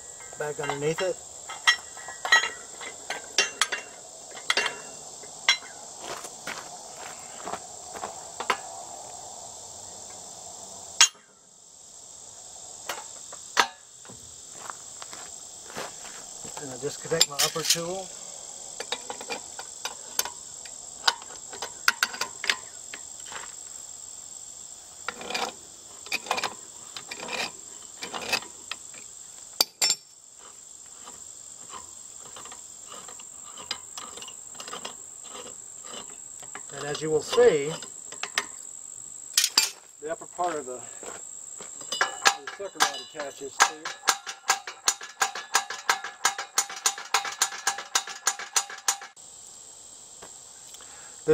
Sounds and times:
Walk, footsteps: 6.0 - 8.2, 14.5 - 16.6, 39.8 - 41.9.

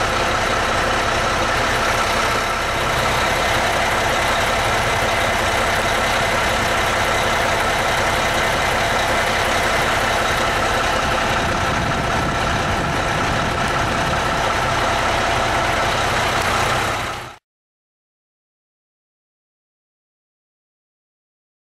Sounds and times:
Truck: 0.0 - 17.4.

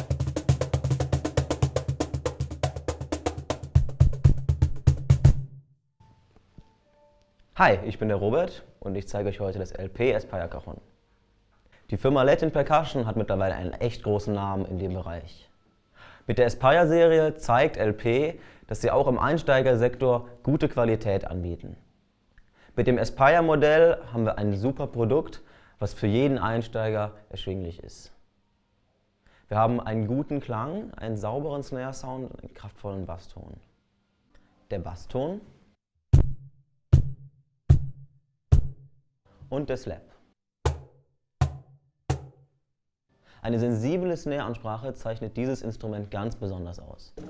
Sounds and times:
Percussion: 0.0 - 5.6, 36.1 - 38.9, 40.6 - 42.5
Speech: 7.6 - 10.9, 11.9 - 15.5, 16.3 - 21.9, 22.8 - 28.2, 29.5 - 33.7, 34.7 - 35.6, 39.5 - 40.2, 43.4 - 47.2.

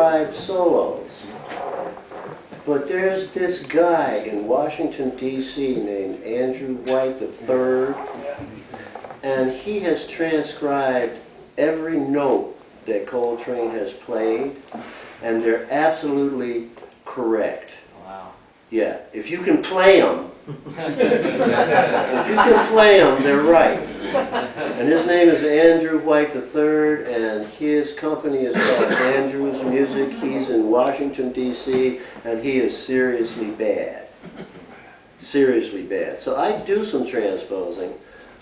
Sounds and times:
Speech: 0.0 - 14.6, 15.2 - 20.4, 21.9 - 23.9, 24.8 - 34.1, 35.2 - 38.0.

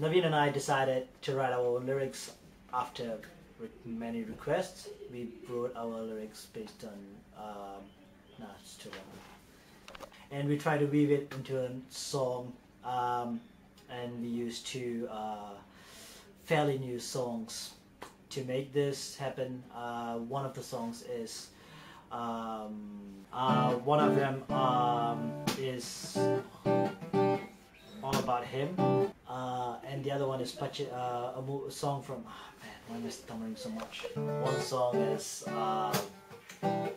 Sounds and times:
Male speech, man speaking: 0.0 - 9.2, 10.3 - 15.6, 16.4 - 21.5, 22.1 - 26.4, 28.0 - 36.1
Music: 23.4 - 27.6, 28.6 - 29.1, 34.1 - 36.9.

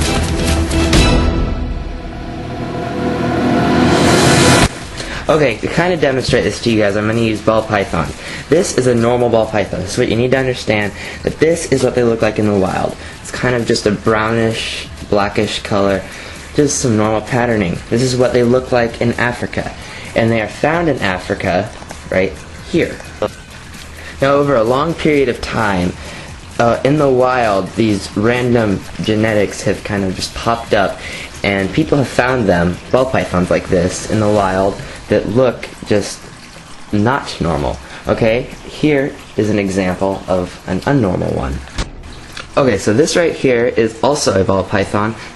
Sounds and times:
Speech: 5.2 - 23.4, 24.2 - 26.0, 26.6 - 36.2, 36.9 - 41.7, 42.4 - 45.2.

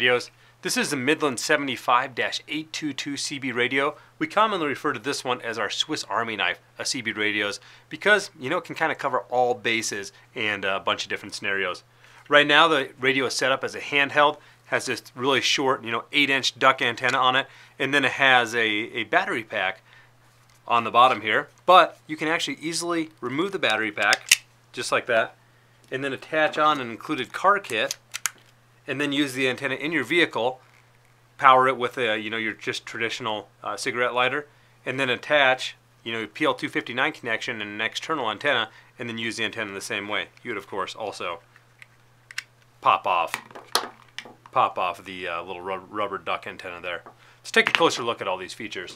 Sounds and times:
Speech: 0.0 - 19.8, 20.7 - 24.2, 24.8 - 28.0, 28.9 - 30.6, 31.4 - 41.5, 42.8 - 43.4, 44.5 - 48.9.

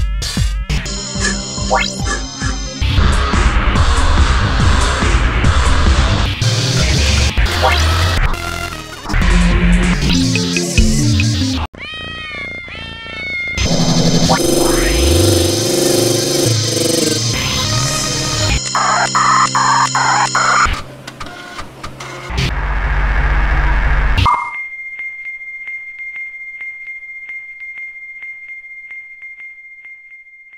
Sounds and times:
Music: 0.0 - 11.7, 13.6 - 20.7, 24.6 - 30.5.

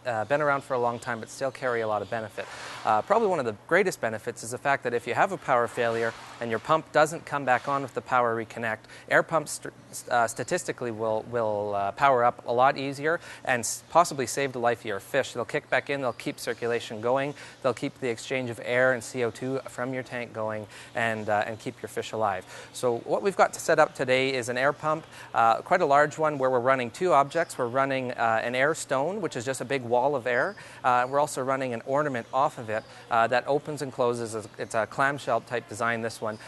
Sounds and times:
Speech: 0.0 - 36.4.

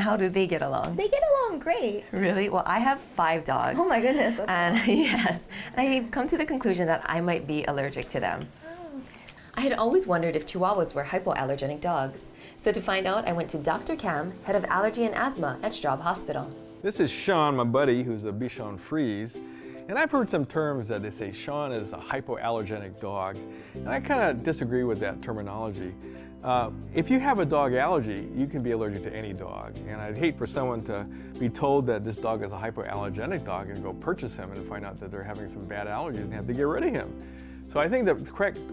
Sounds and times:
Music: 0.0 - 38.7.

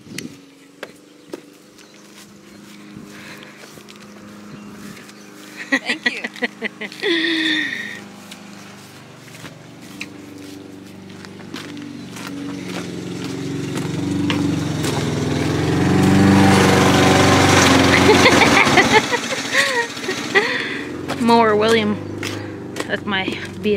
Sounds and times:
Lawn mower: 0.4 - 22.8.

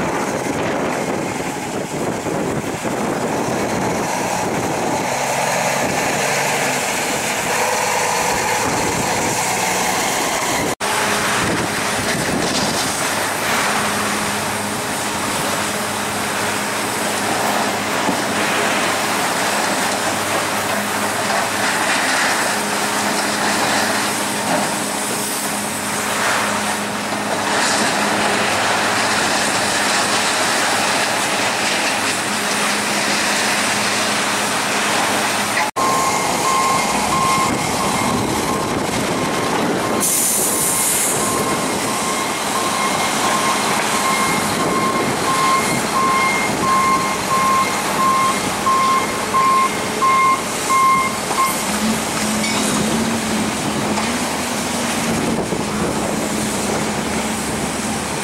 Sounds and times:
Vehicle: 0.0 - 58.2.

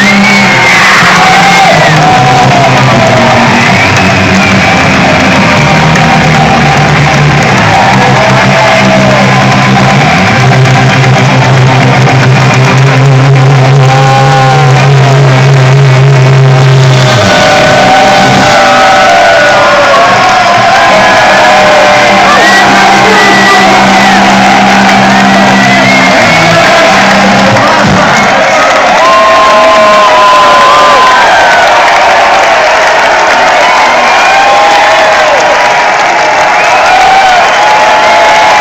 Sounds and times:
Drum: 0.8 - 28.6
Drum machine: 1.2 - 28.4
Speech: 22.3 - 23.9.

